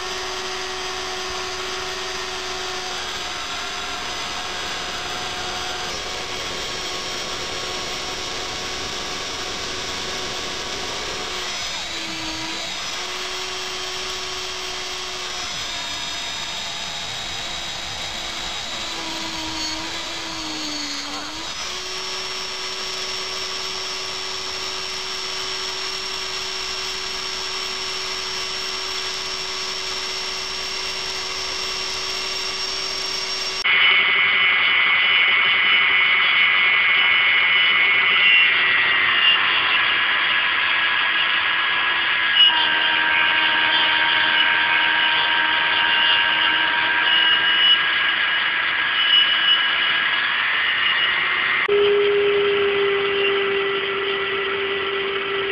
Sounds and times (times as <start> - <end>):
Power tool: 0.0 - 55.5.